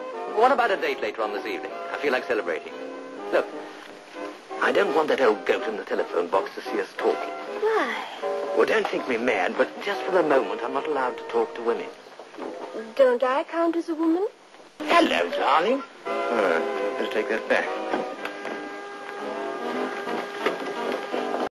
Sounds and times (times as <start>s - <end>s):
Music: 0.0s - 21.5s.